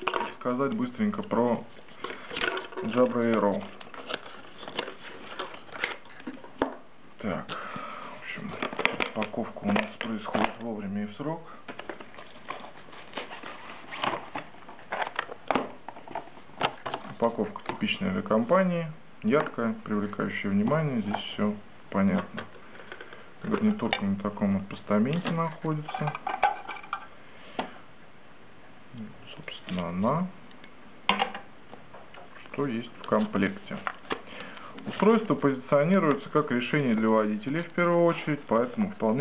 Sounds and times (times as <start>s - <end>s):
Speech: 0.0s - 1.7s, 2.8s - 3.8s, 7.2s - 7.6s, 8.2s - 11.6s, 17.2s - 22.5s, 23.4s - 26.3s, 28.9s - 30.4s, 32.4s - 33.9s, 34.9s - 39.2s.